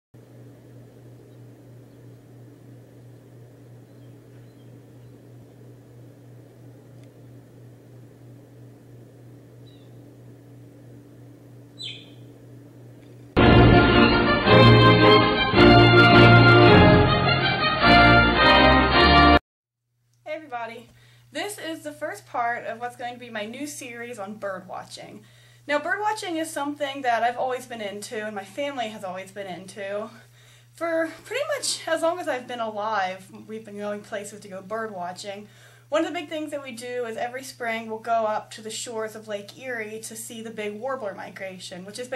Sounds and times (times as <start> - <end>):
Bird: 3.8 - 5.2, 9.6 - 10.1, 11.8 - 12.3.